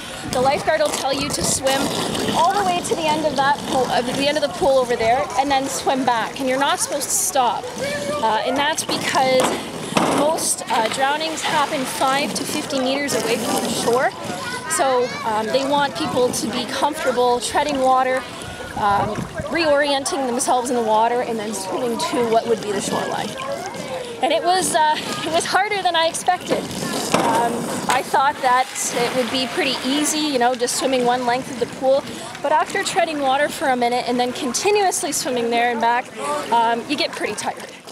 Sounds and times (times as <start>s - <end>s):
Outside, urban or manmade: 0.0s - 37.9s
Speech: 0.3s - 9.6s, 10.2s - 37.9s.